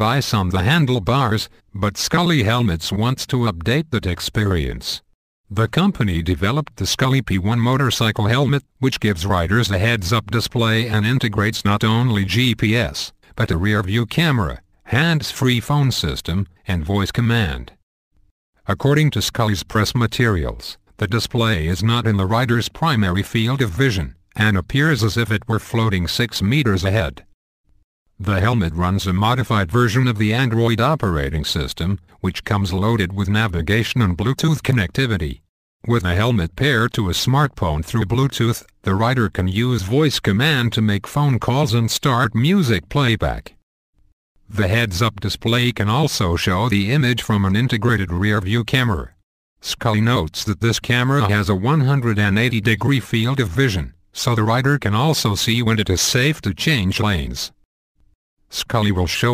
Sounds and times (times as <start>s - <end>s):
Speech: 0.0s - 17.8s, 18.7s - 27.3s, 28.2s - 43.6s, 44.5s - 57.6s, 58.5s - 59.3s.